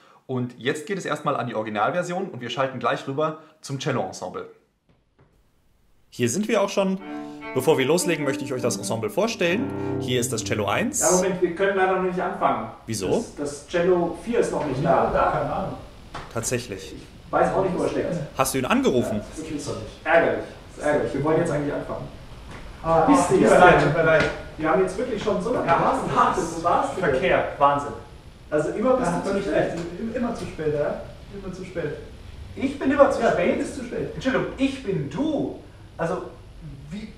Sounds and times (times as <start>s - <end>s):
Speech: 0.3s - 4.6s, 6.1s - 22.1s, 22.8s - 37.1s
Cello: 6.9s - 11.4s.